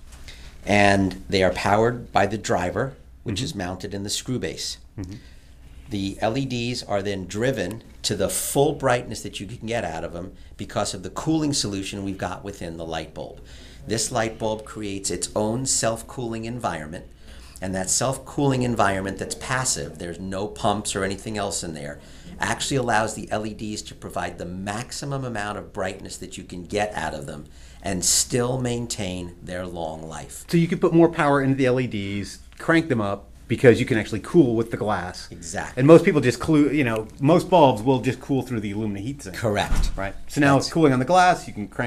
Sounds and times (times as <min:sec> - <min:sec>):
Speech: 0:00.6 - 0:05.2, 0:05.9 - 0:41.8.